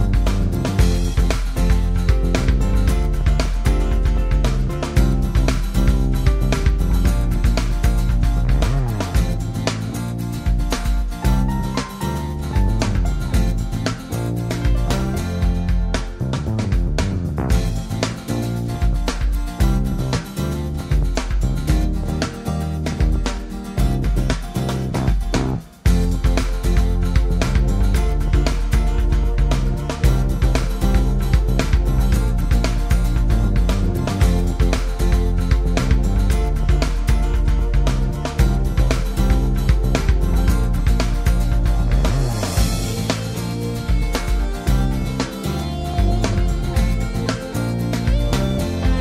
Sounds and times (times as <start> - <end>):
Music: 0.0 - 49.0.